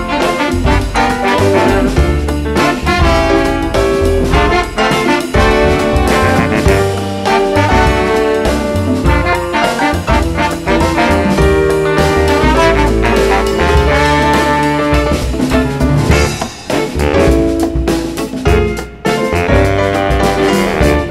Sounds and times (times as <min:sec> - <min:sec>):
Saxophone: 0:00.0 - 0:16.4, 0:17.0 - 0:17.7, 0:19.3 - 0:21.1
Brass instrument: 0:00.0 - 0:21.1.